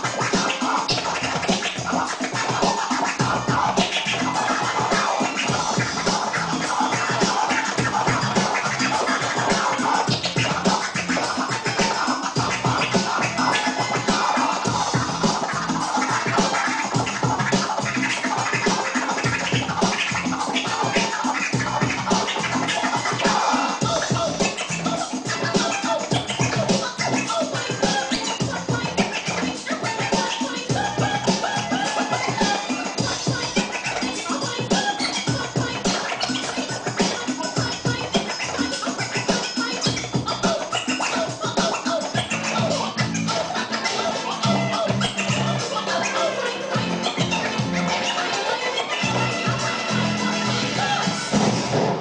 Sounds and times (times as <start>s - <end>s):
Scratching (performance technique): 0.0s - 52.0s.